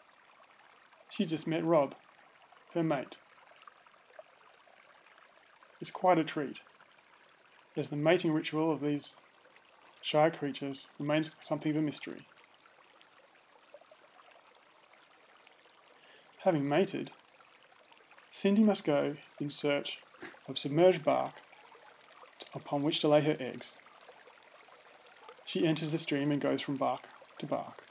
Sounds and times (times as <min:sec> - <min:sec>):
Speech: 0:01.1 - 0:02.0, 0:02.8 - 0:03.2, 0:05.8 - 0:06.6, 0:07.8 - 0:09.2, 0:10.0 - 0:12.2, 0:16.4 - 0:17.2, 0:18.4 - 0:21.4, 0:22.4 - 0:23.8, 0:25.5 - 0:27.8.